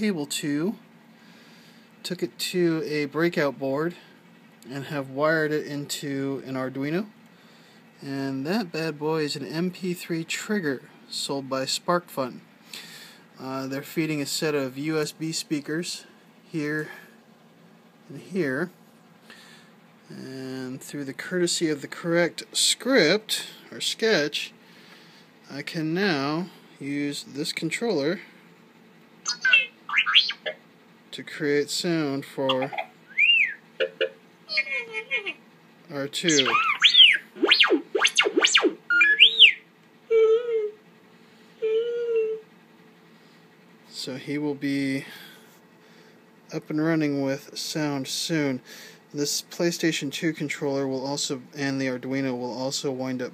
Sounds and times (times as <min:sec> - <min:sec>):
Speech: 0:00.0 - 0:00.8, 0:02.0 - 0:07.1, 0:08.0 - 0:12.4, 0:13.4 - 0:17.0, 0:18.1 - 0:18.8, 0:20.1 - 0:24.6, 0:25.5 - 0:28.3, 0:31.1 - 0:32.8, 0:34.5 - 0:36.6, 0:43.9 - 0:45.2, 0:46.5 - 0:53.3.